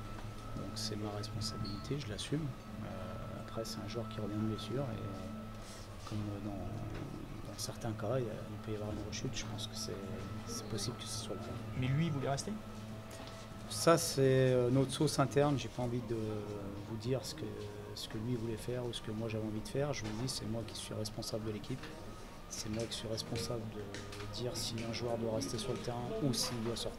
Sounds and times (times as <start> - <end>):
Speech: 0.6 - 5.4, 6.1 - 12.6, 13.7 - 26.9.